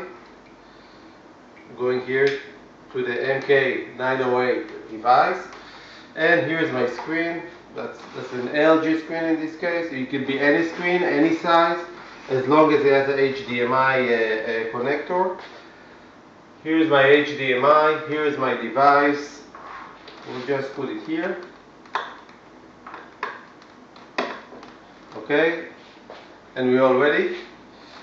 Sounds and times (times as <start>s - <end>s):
Speech: 0.0s - 0.2s, 1.6s - 5.6s, 6.2s - 15.5s, 16.6s - 19.5s, 20.2s - 21.6s, 25.2s - 25.8s, 26.6s - 27.6s.